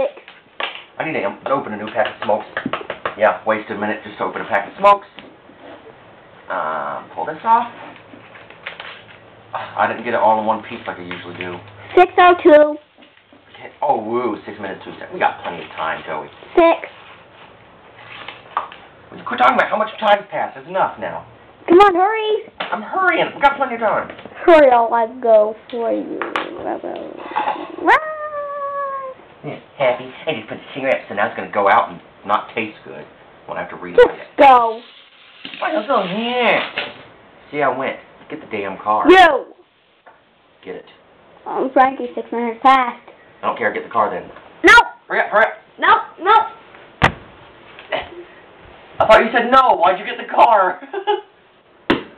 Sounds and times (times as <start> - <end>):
Inside, small room: 0.0 - 52.1.